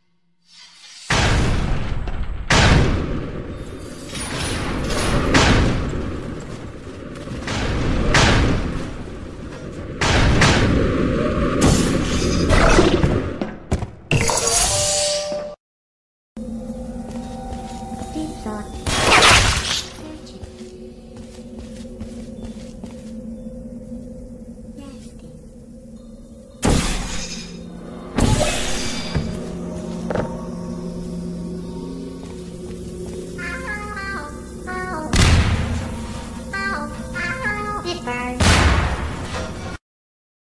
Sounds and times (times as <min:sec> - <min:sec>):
Gunshot, gunfire: 0:02.5 - 0:03.0.